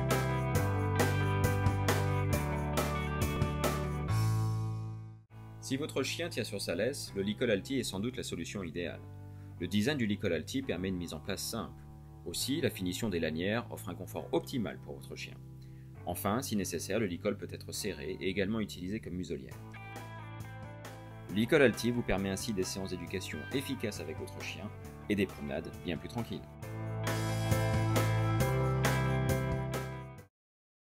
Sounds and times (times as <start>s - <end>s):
Music: 0.0s - 30.3s
Speech: 5.6s - 9.0s, 9.6s - 15.4s, 16.1s - 19.6s, 21.3s - 26.5s.